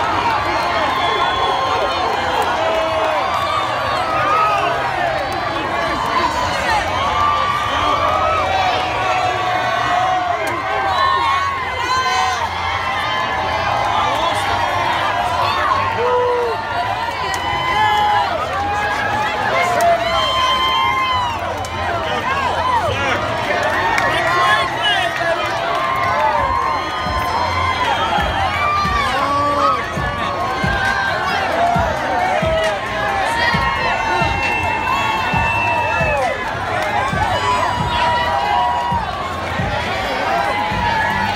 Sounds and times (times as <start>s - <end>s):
Speech: 0.0s - 41.3s.